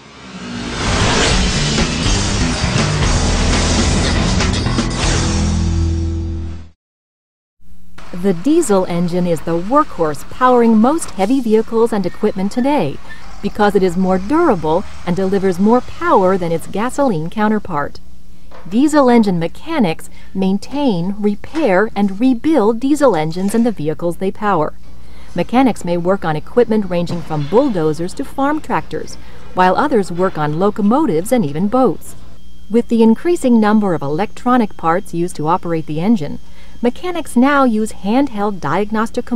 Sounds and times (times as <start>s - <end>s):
Speech: 8.2s - 18.0s, 18.7s - 24.8s, 25.4s - 39.3s.